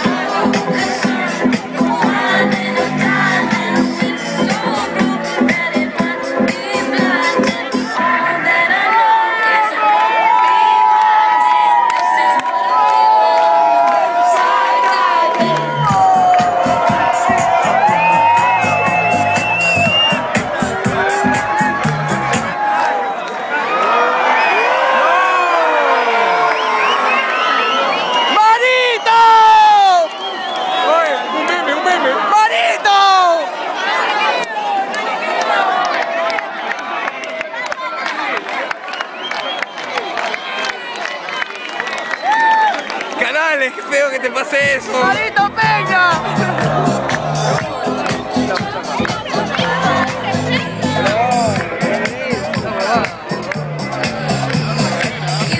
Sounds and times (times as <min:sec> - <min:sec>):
Crowd: 0:00.0 - 0:55.5
Cheering: 0:07.8 - 0:55.5.